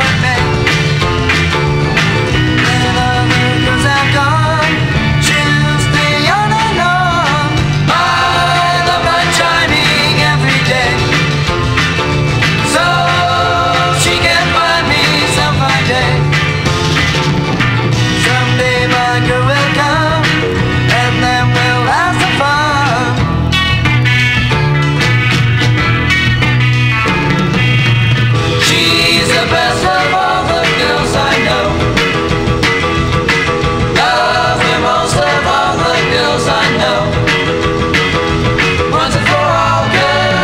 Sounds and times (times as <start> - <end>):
Music: 0.0 - 40.4.